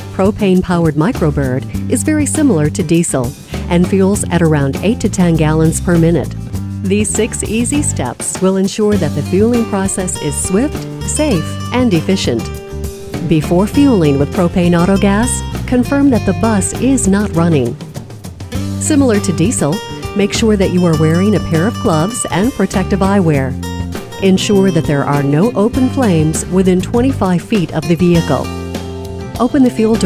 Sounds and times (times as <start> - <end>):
Music: 0.0 - 30.0
Speech: 0.2 - 12.5, 13.2 - 17.8, 18.8 - 23.6, 24.2 - 28.5, 29.4 - 30.0.